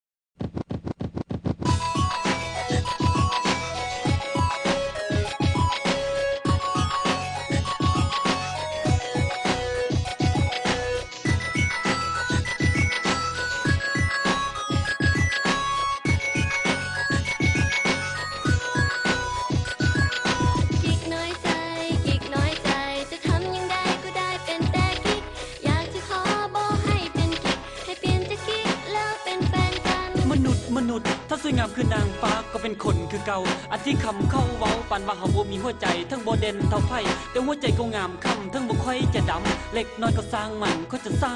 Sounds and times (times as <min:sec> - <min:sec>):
Happy music: 0:01.6 - 0:41.3.